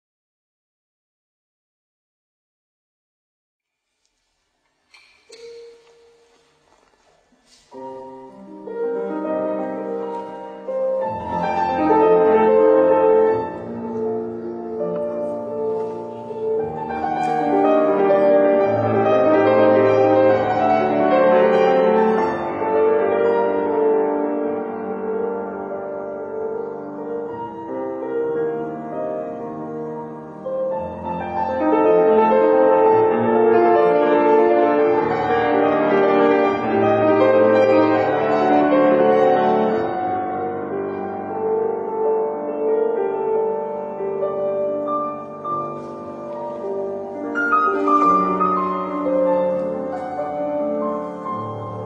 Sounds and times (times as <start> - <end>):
Piano: 3.7 - 51.8.